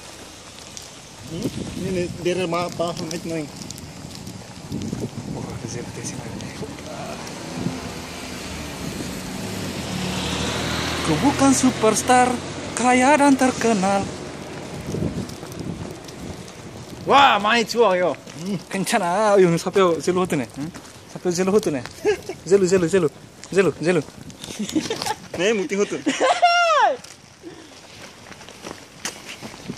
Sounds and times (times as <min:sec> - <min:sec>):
Traffic noise, roadway noise: 0:00.0 - 0:29.7.